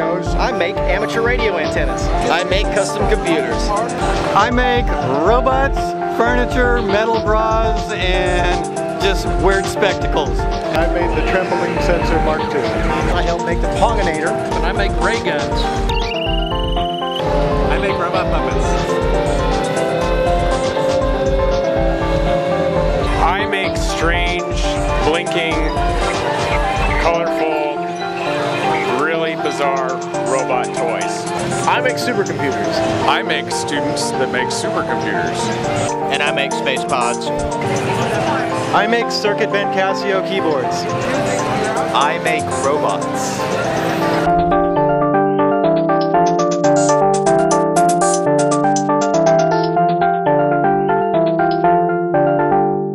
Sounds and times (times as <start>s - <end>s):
Electric piano: 0.0s - 52.9s
Synthesizer: 0.0s - 52.9s.